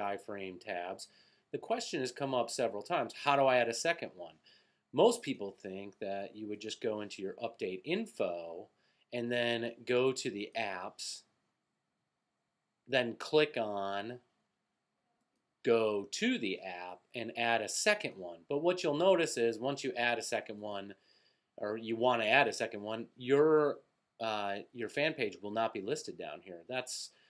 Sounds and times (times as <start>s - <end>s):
Speech: 0.0s - 4.4s, 5.0s - 11.3s, 12.9s - 14.2s, 15.7s - 21.0s, 21.6s - 27.2s.